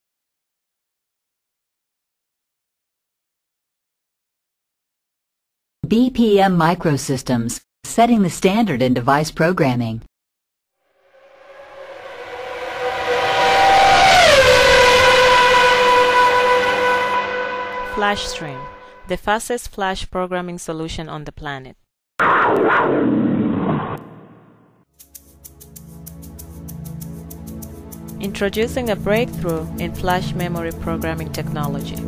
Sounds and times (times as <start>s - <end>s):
Speech synthesizer: 5.8s - 10.1s, 17.8s - 21.8s, 28.2s - 32.0s.